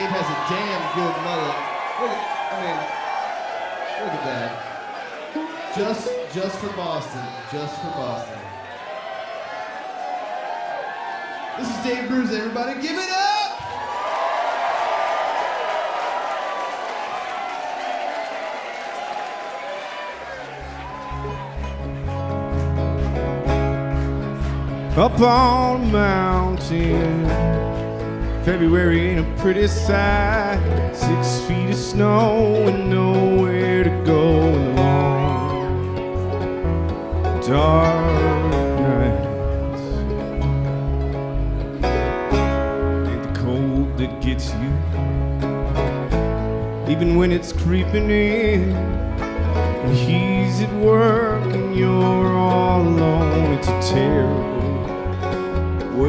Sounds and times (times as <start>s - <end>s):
Speech: 0.0s - 2.9s, 5.7s - 8.4s, 11.6s - 13.6s.